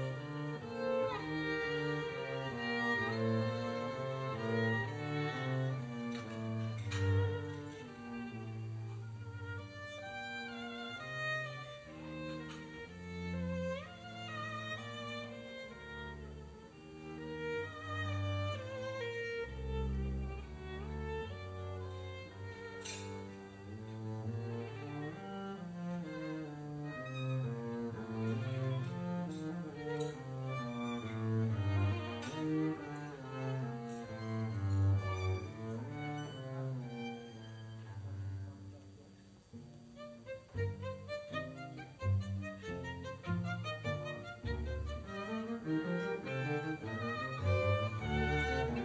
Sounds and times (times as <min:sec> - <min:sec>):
String section: 0:00.0 - 0:48.8.